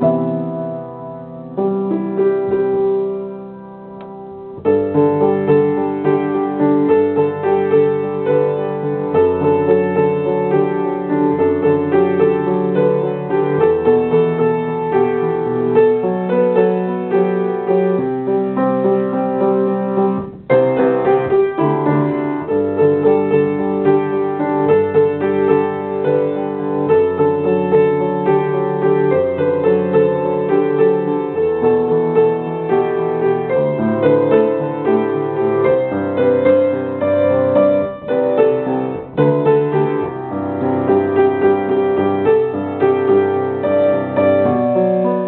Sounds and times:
Piano: 0:00.0 - 0:45.2.

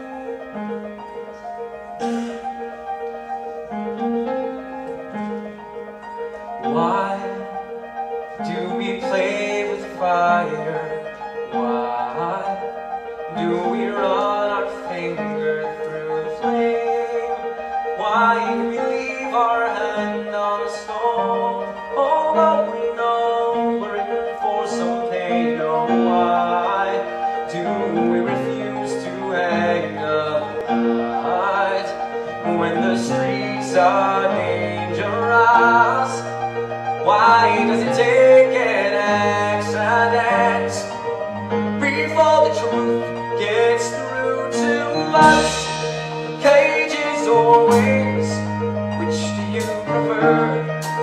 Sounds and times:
Music: 0:00.0 - 0:51.0.

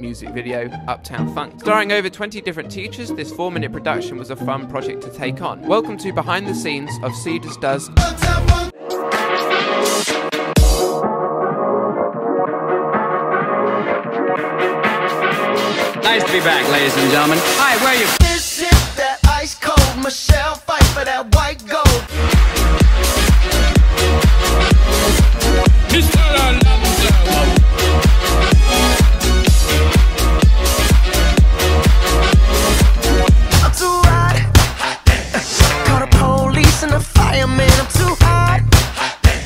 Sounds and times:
Soundtrack music: 0:00.0 - 0:19.1, 0:21.9 - 0:39.4.

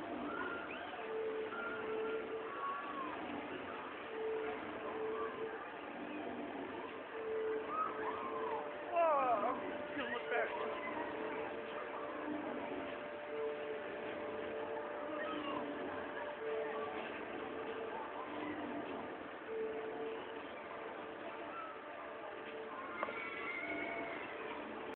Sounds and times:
Music: 0:00.0 - 0:24.9.

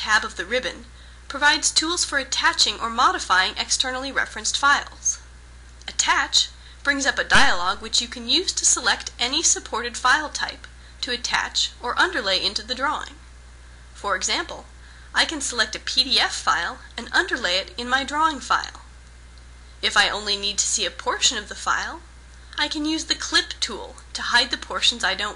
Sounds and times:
Speech: 0:00.0 - 0:05.3, 0:05.9 - 0:13.2, 0:14.0 - 0:18.9, 0:19.8 - 0:25.3.

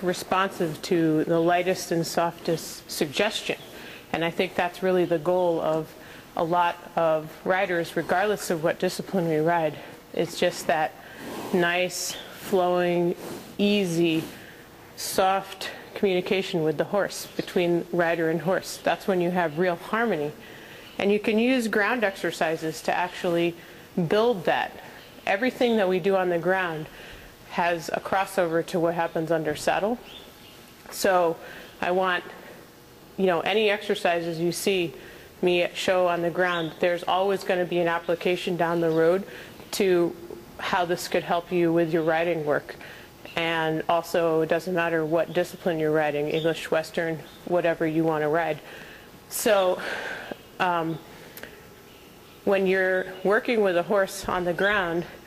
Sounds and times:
Speech: 0:00.0 - 0:14.4, 0:15.0 - 0:20.4, 0:21.0 - 0:26.9, 0:27.5 - 0:30.1, 0:30.9 - 0:32.4, 0:33.2 - 0:48.7, 0:49.3 - 0:49.9, 0:50.6 - 0:51.1, 0:52.5 - 0:55.2.

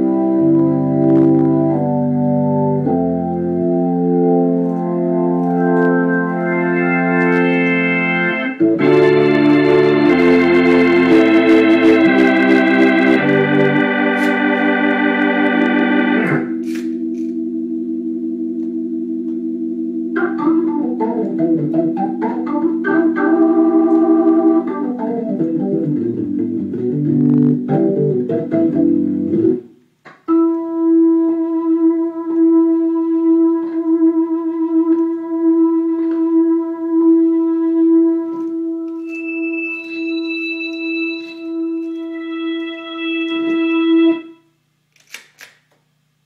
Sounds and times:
Electronic organ: 0:00.0 - 0:44.5.

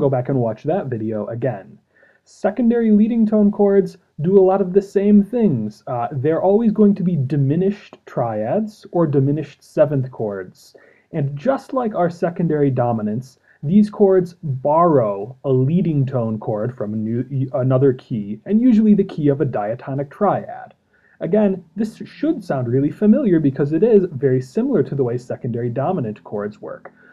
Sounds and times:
Speech: 0:00.0 - 0:27.1.

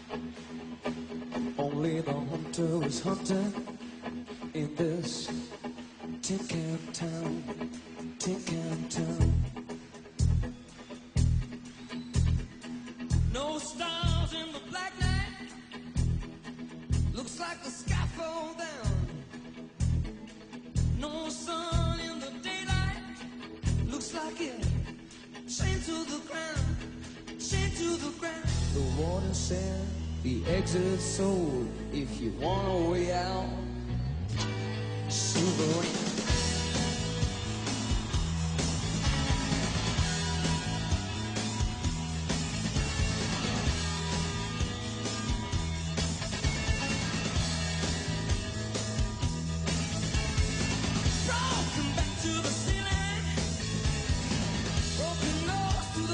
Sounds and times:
Music: 0:00.0 - 0:56.1.

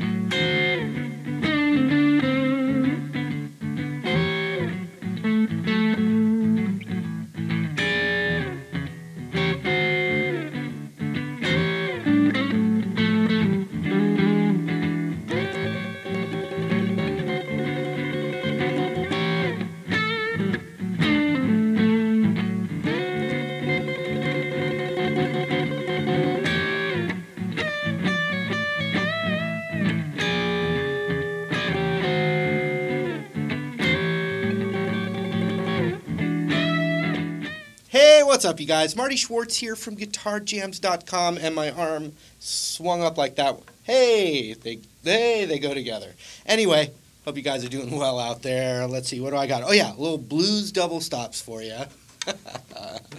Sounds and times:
Guitar: 0:00.0 - 0:53.1.

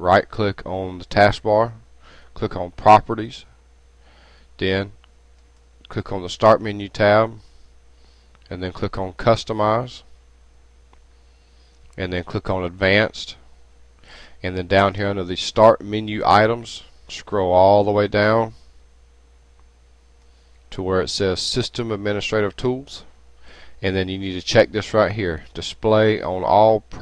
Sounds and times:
Speech: 0:00.0 - 0:01.8, 0:02.4 - 0:03.5, 0:04.6 - 0:05.0, 0:05.8 - 0:07.4, 0:08.5 - 0:10.1, 0:12.0 - 0:13.4, 0:14.4 - 0:18.6, 0:20.7 - 0:23.1, 0:23.8 - 0:27.0.

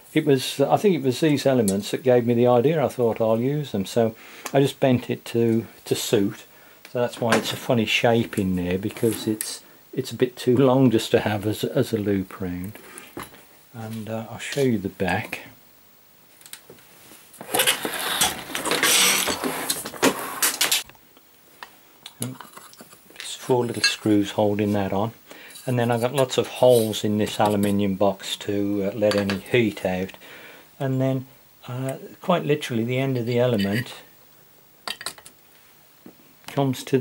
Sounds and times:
Inside, small room: 0:00.0 - 0:37.0
Speech: 0:00.1 - 0:12.8, 0:13.7 - 0:15.6, 0:22.2 - 0:22.4, 0:23.2 - 0:30.2, 0:30.8 - 0:34.1, 0:36.5 - 0:37.0.

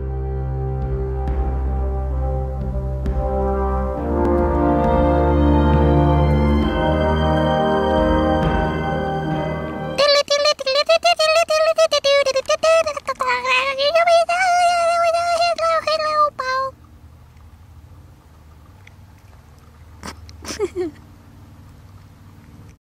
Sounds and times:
Speech: 0:10.0 - 0:16.7.

